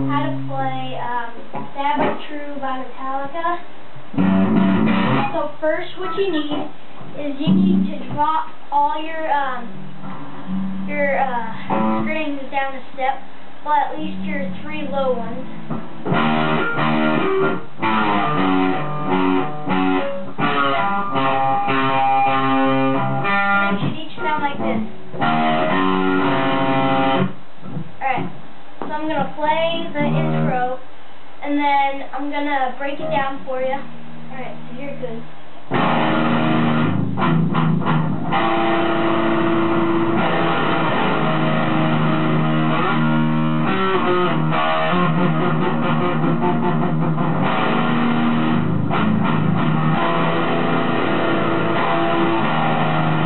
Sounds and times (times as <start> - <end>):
Strum: 0.0 - 2.6, 4.1 - 12.5, 13.7 - 30.7, 32.2 - 53.2
Speech: 0.0 - 3.7, 5.2 - 9.8, 10.9 - 15.5, 23.7 - 24.9, 28.0 - 35.3.